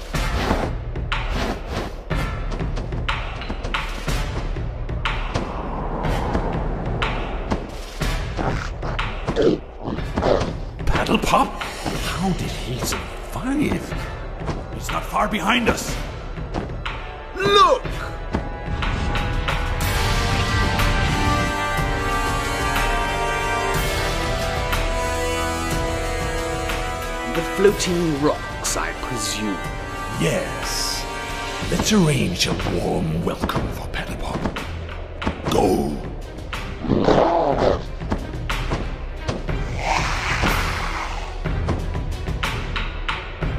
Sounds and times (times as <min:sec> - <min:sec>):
Music: 0:00.0 - 0:43.5.